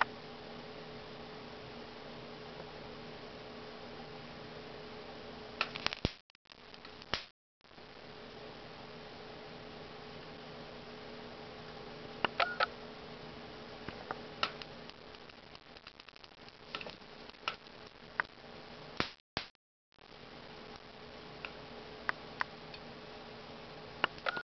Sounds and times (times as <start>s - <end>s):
Frying (food): 14.4s - 18.9s.